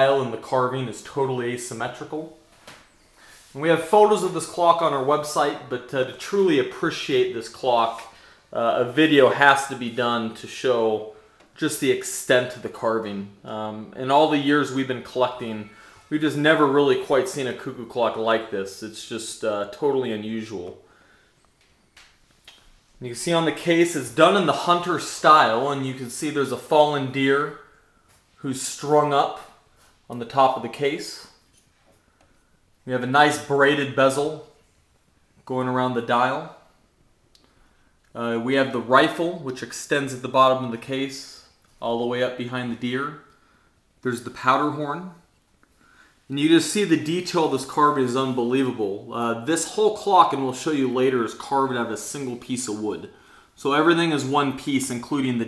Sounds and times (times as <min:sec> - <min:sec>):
Speech: 0:00.0 - 0:02.4, 0:03.5 - 0:20.8, 0:23.0 - 0:27.7, 0:28.4 - 0:31.4, 0:32.8 - 0:34.6, 0:35.4 - 0:36.7, 0:38.1 - 0:43.3, 0:44.0 - 0:45.3, 0:46.3 - 0:55.4.